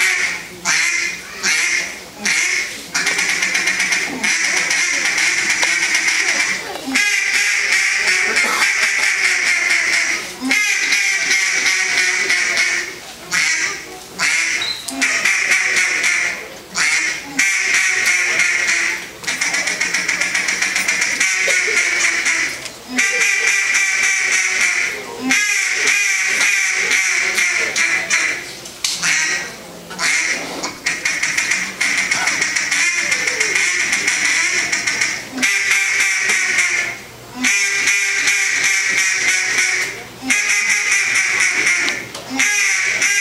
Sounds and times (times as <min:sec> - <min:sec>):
Quack: 0:00.0 - 0:43.2.